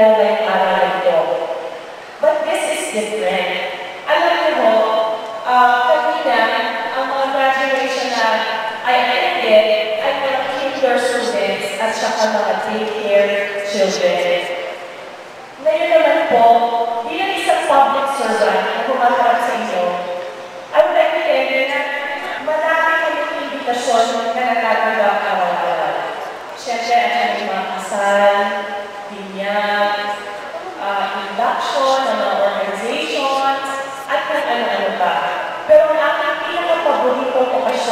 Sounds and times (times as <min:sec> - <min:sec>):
Female speech, woman speaking: 0:00.0 - 0:01.5, 0:02.2 - 0:14.6, 0:15.6 - 0:20.2, 0:20.8 - 0:37.9
Narration, monologue: 0:00.0 - 0:37.9.